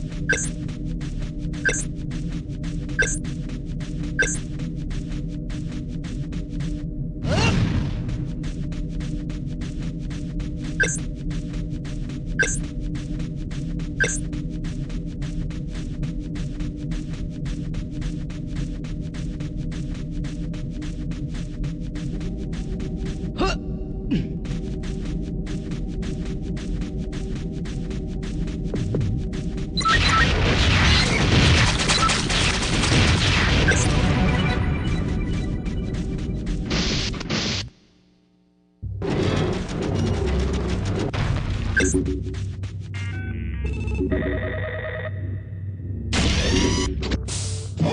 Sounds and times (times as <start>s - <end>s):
Run: 0.0s - 6.9s, 8.1s - 23.4s, 24.4s - 29.8s.